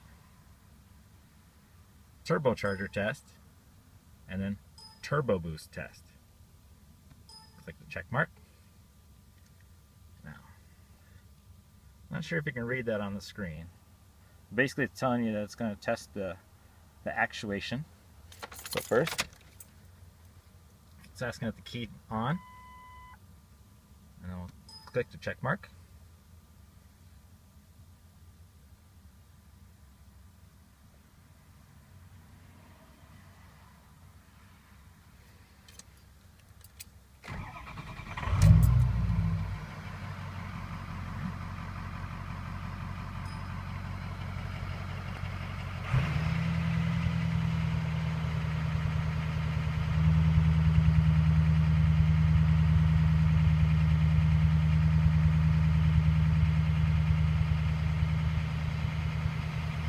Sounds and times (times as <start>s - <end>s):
Speech: 2.2s - 3.4s, 4.3s - 6.2s, 7.6s - 8.4s, 10.2s - 10.6s, 12.1s - 13.7s, 14.5s - 16.4s, 17.0s - 17.9s, 18.8s - 19.2s, 21.0s - 22.4s, 24.2s - 25.8s.